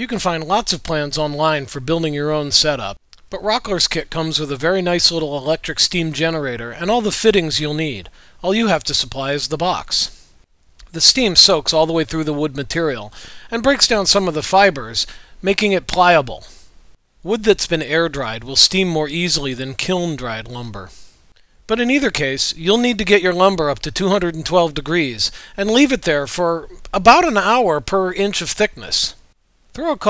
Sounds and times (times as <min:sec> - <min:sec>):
Speech: 0:00.0 - 0:10.2, 0:10.8 - 0:16.6, 0:17.2 - 0:21.0, 0:21.7 - 0:29.2, 0:29.8 - 0:30.1.